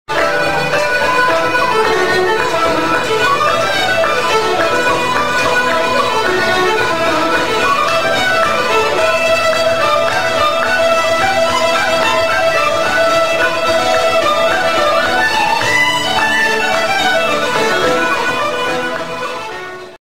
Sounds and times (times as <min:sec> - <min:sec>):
Traditional music: 0:00.1 - 0:20.0.